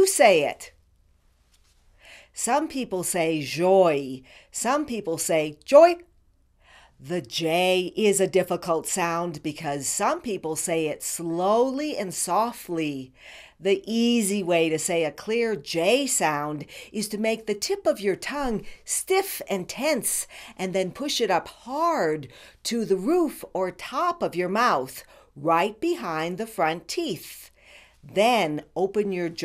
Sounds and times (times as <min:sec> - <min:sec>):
Female speech, woman speaking: 0:00.0 - 0:00.8, 0:02.4 - 0:06.1, 0:07.0 - 0:27.5, 0:28.1 - 0:29.4
Narration, monologue: 0:00.0 - 0:29.4.